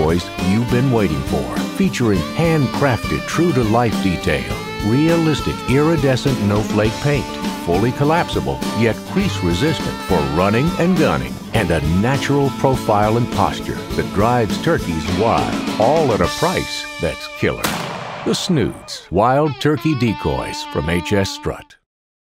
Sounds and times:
Speech: 0:00.0 - 0:17.7, 0:18.3 - 0:21.9
Music: 0:00.0 - 0:21.9.

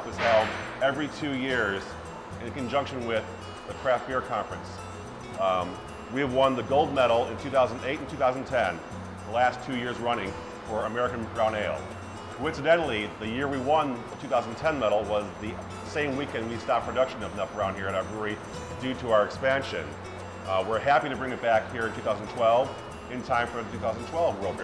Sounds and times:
Speech: 0:00.0 - 0:04.8, 0:05.4 - 0:11.8, 0:12.4 - 0:24.6
Music: 0:00.0 - 0:24.6.

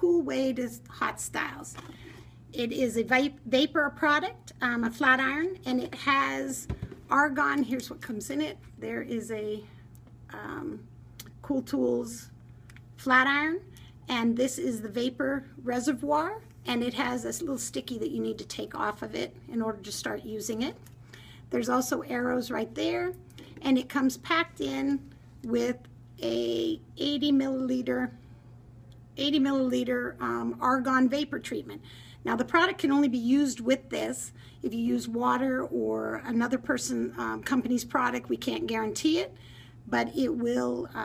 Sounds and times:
Speech: 0:00.0 - 0:01.8, 0:02.5 - 0:09.7, 0:10.3 - 0:12.4, 0:13.0 - 0:20.8, 0:21.5 - 0:28.2, 0:29.2 - 0:41.0.

